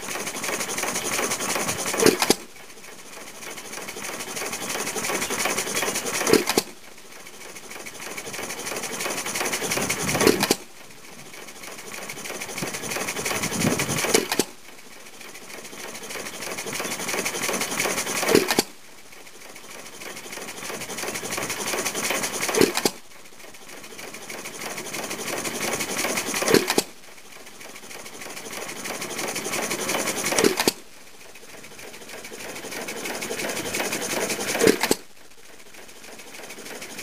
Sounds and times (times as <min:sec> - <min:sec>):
Idling: 0:00.0 - 0:37.0
Medium engine (mid frequency): 0:00.0 - 0:37.0.